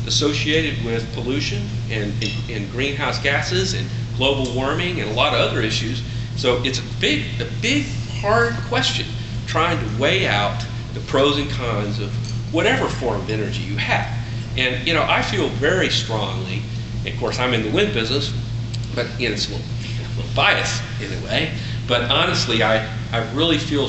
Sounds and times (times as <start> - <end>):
Speech: 0.0 - 23.8.